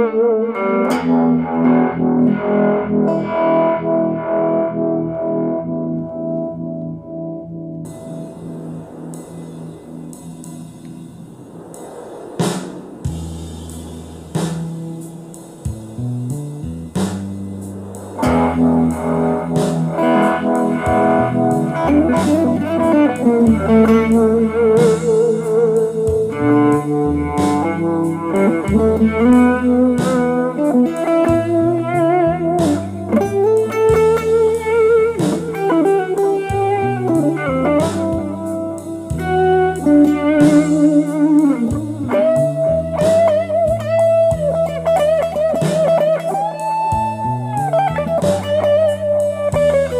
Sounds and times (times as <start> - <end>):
Guitar: 0.0 - 49.9
Harmonic: 0.0 - 49.9.